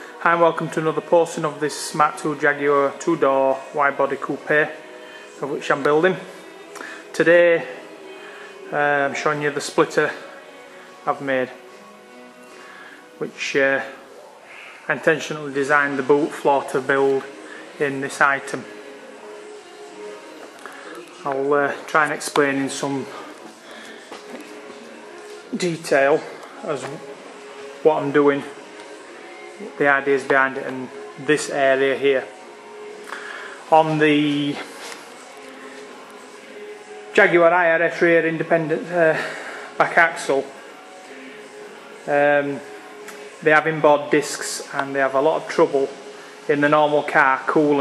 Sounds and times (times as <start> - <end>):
Music: 0.0 - 47.8
Speech: 0.2 - 4.8, 5.4 - 6.3, 7.2 - 7.8, 8.7 - 10.2, 11.1 - 11.6, 13.2 - 14.0, 14.9 - 18.7, 21.2 - 23.2, 25.5 - 27.0, 27.9 - 28.5, 29.6 - 32.3, 33.7 - 34.7, 37.2 - 40.5, 42.1 - 42.6, 43.4 - 47.8.